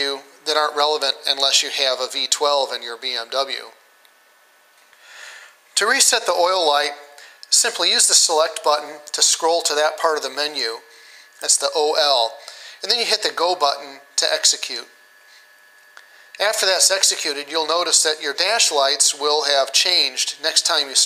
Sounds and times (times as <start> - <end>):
Speech: 0.0 - 3.8, 5.8 - 15.0, 16.4 - 21.0.